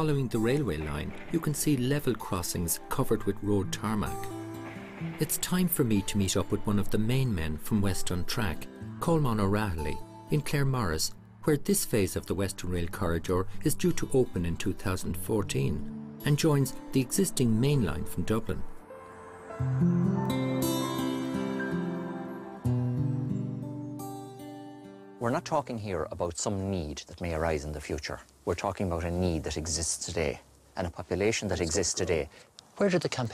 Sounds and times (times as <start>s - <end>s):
Speech: 0.0s - 4.2s, 5.2s - 18.7s, 25.2s - 33.3s
Music: 0.0s - 26.1s.